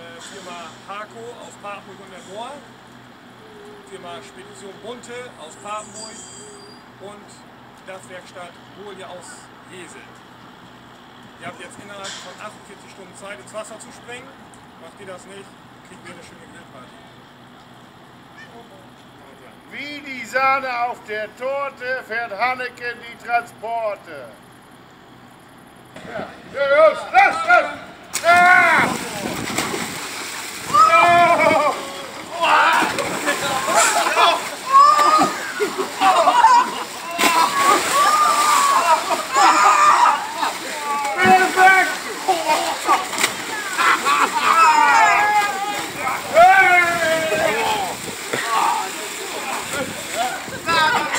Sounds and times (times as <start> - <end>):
Speech: 0.0 - 2.7, 3.8 - 6.3, 7.0 - 10.2, 11.4 - 17.1, 18.4 - 24.4, 40.4 - 42.6.